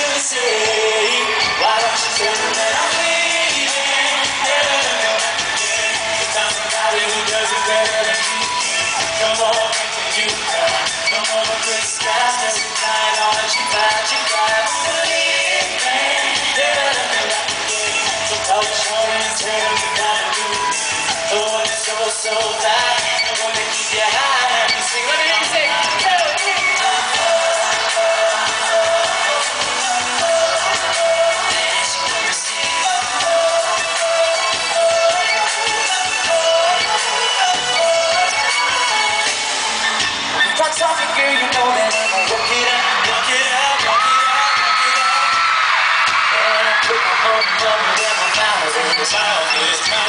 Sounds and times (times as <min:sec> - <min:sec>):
Male singing: 0:00.0 - 0:39.4, 0:40.6 - 0:45.6, 0:46.3 - 0:50.0
Music: 0:00.0 - 0:50.0.